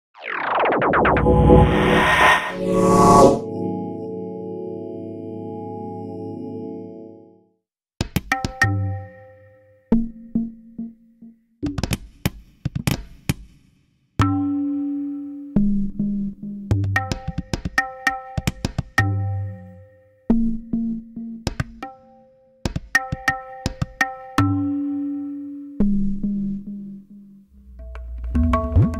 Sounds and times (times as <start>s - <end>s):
Musical instrument: 1.1s - 7.6s.